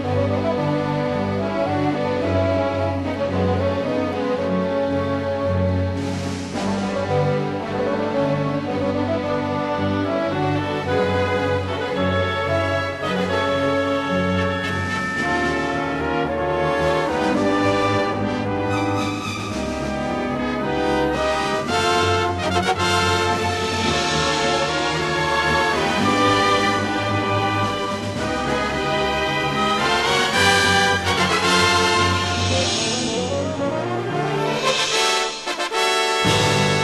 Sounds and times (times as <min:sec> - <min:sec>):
Music: 0:00.0 - 0:36.8.